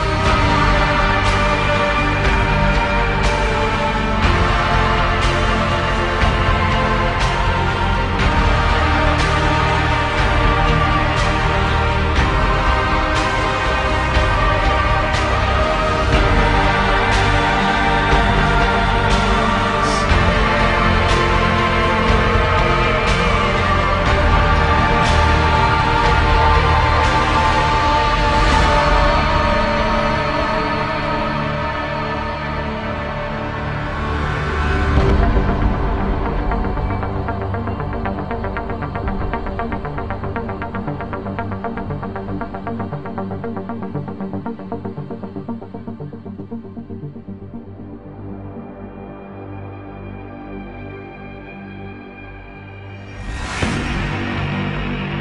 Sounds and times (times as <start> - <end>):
Scary music: 0.0 - 55.2.